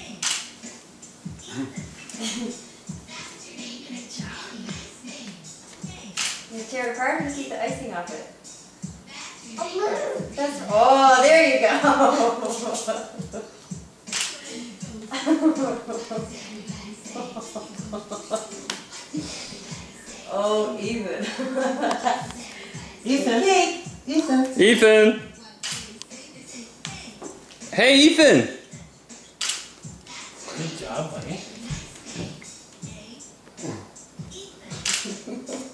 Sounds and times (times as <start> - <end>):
Music: 0.0 - 35.7.